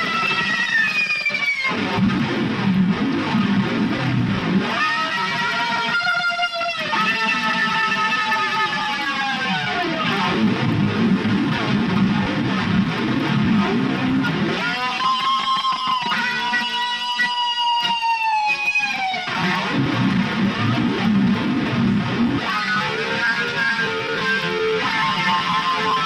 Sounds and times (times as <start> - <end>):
Electric guitar: 0.0 - 26.0.